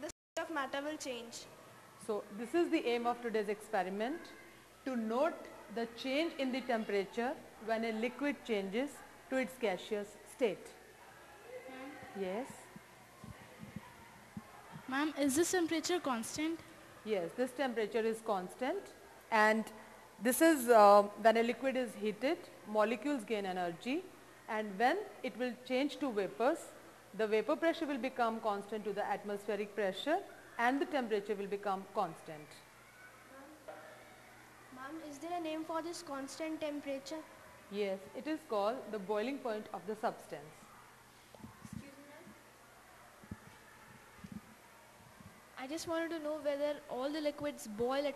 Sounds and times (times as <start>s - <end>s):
Female speech, woman speaking: 0.0s - 10.8s, 11.7s - 12.8s, 14.8s - 32.6s, 34.8s - 40.6s, 45.6s - 48.1s.